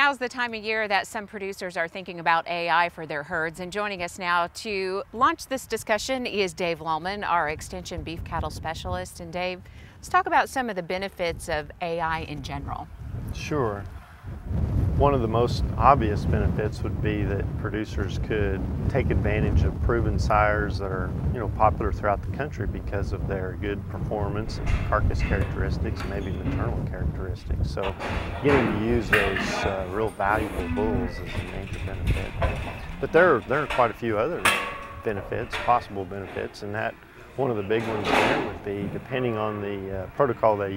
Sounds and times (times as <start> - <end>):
Speech: 0.0 - 13.9, 15.0 - 34.5, 35.1 - 40.7.